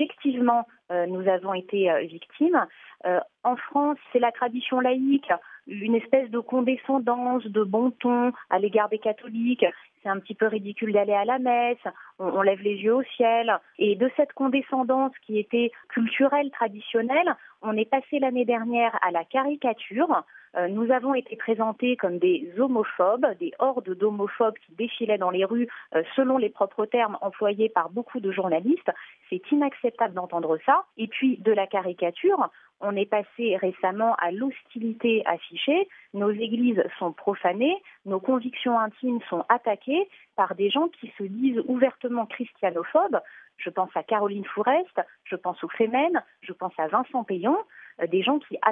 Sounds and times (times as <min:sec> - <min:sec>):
Speech: 0:00.0 - 0:48.7.